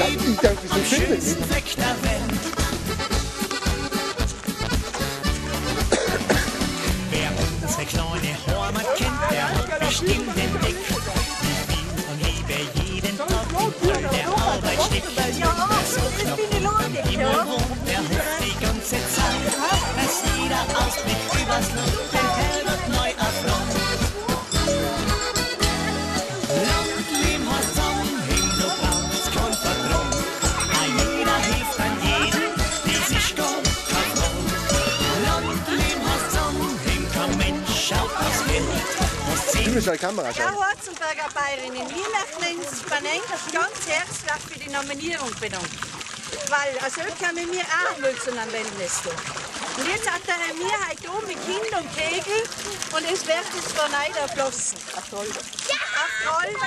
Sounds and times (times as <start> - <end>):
Speech: 0.0 - 2.2, 7.1 - 24.4
Music: 0.0 - 40.4.